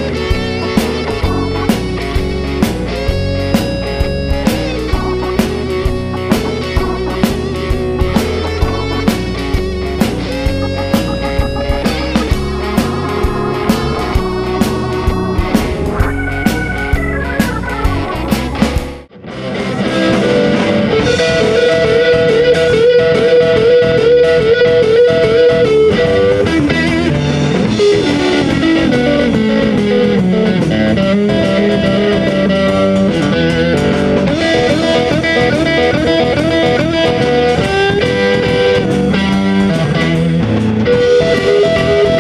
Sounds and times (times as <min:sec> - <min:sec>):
Music: 0:00.0 - 0:42.2.